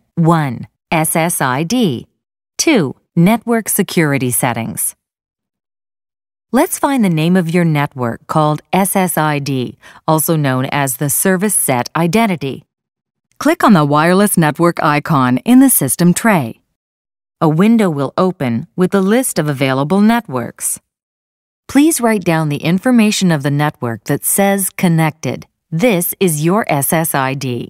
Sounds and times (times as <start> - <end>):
Speech: 0.0 - 5.0, 6.5 - 12.7, 13.4 - 16.6, 17.4 - 20.8, 21.7 - 27.6.